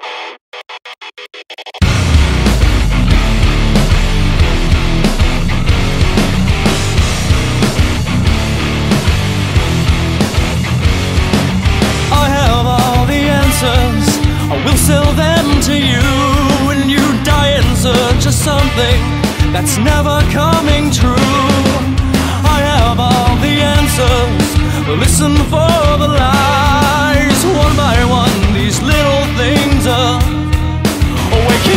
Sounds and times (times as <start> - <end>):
Independent music: 1.6 - 31.7
Dance music: 1.8 - 24.4, 31.0 - 31.7
Exciting music: 1.8 - 31.7
Pop music: 1.8 - 31.7.